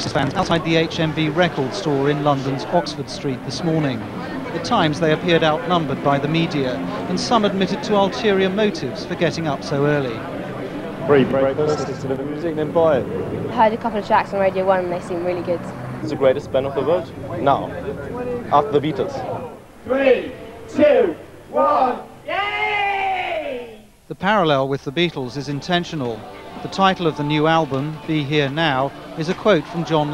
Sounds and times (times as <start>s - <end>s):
Speech: 0.0s - 10.2s, 11.1s - 30.1s.